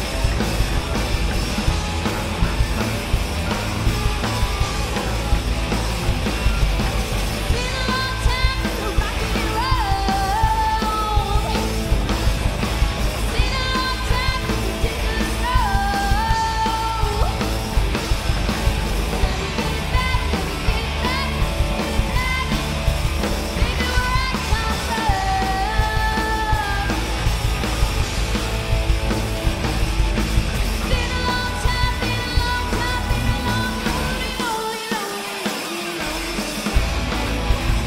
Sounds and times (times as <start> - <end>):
Rock and roll: 0.0 - 37.8.